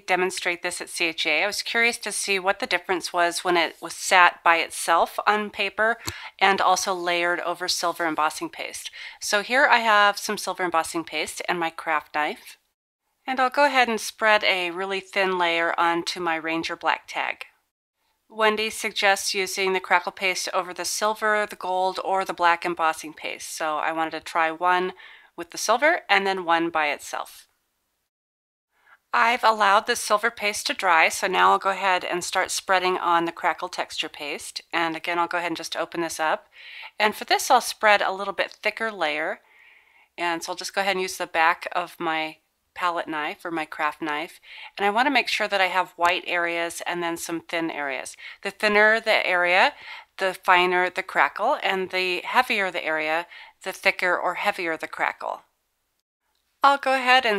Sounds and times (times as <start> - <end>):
Speech: 0.0 - 12.6, 13.3 - 17.5, 18.3 - 27.4, 29.2 - 39.4, 40.2 - 55.5, 56.6 - 57.3.